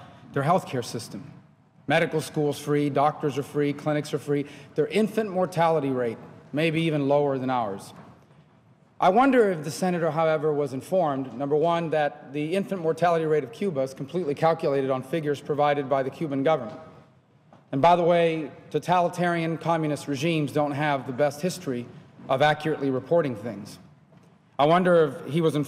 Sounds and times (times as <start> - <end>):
Male speech, man speaking: 0.0 - 8.0, 9.0 - 16.9, 17.7 - 23.8, 24.6 - 25.6
Narration, monologue: 0.0 - 25.6.